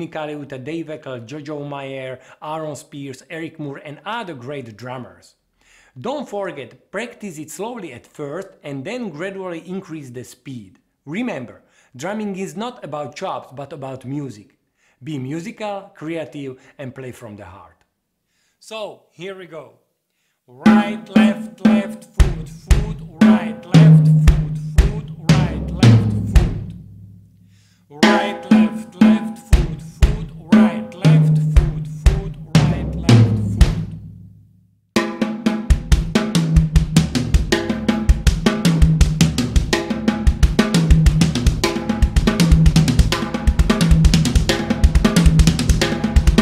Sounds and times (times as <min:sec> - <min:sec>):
Music: 0:20.7 - 0:27.3, 0:28.0 - 0:46.4.